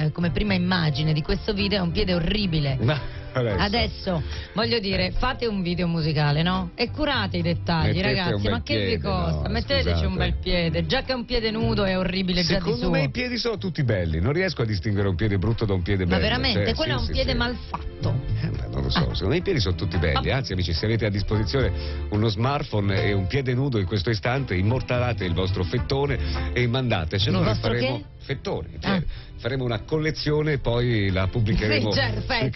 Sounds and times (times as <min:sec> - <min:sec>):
Music: 0:00.0 - 0:32.5
Speech: 0:04.6 - 0:32.5.